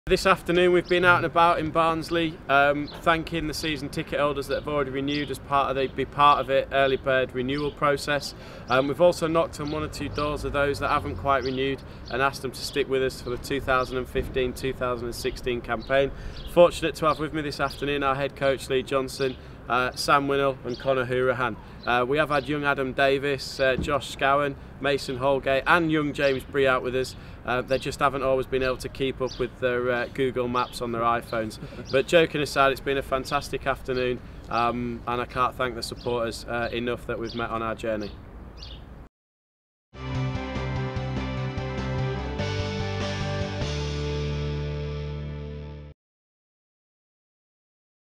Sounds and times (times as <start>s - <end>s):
Speech: 0.1s - 38.2s.